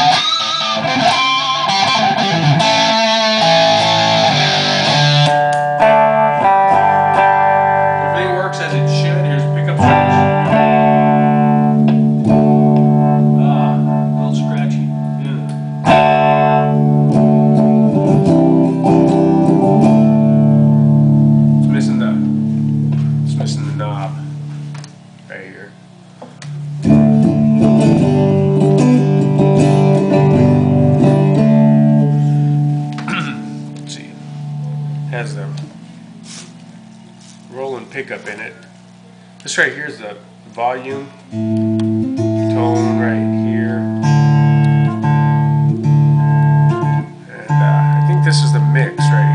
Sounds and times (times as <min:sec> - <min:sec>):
Guitar: 0:00.0 - 0:49.3
Speech: 0:08.2 - 0:10.2, 0:13.4 - 0:15.5, 0:21.6 - 0:22.3, 0:23.3 - 0:24.3, 0:25.3 - 0:25.8, 0:35.1 - 0:35.6, 0:37.5 - 0:38.7, 0:39.4 - 0:41.2, 0:42.5 - 0:43.9, 0:47.3 - 0:49.3.